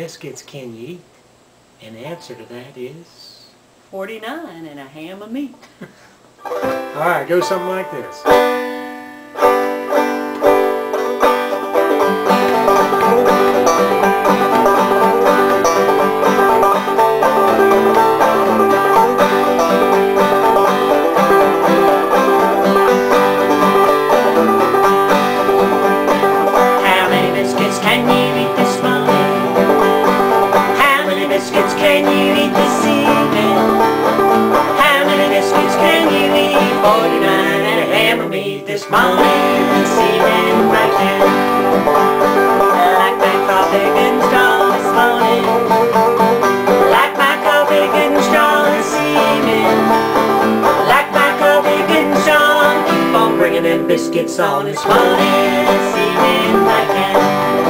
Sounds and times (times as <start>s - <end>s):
Music: 6.4s - 57.7s.